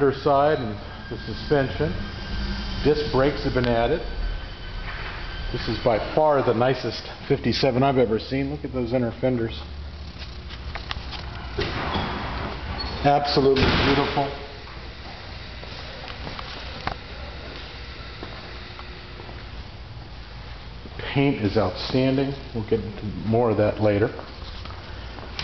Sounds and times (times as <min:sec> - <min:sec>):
Speech: 0:00.0 - 0:02.0, 0:02.9 - 0:04.0, 0:05.6 - 0:09.7, 0:13.0 - 0:14.5, 0:21.0 - 0:24.2.